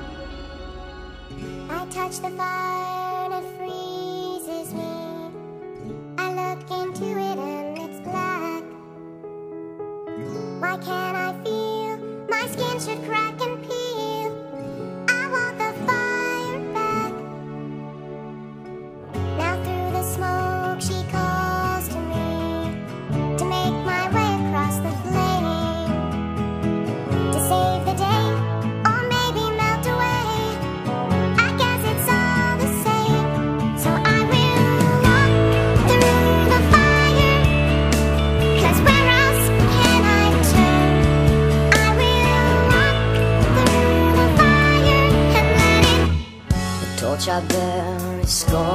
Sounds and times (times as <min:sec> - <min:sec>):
Music: 0:00.0 - 0:48.7.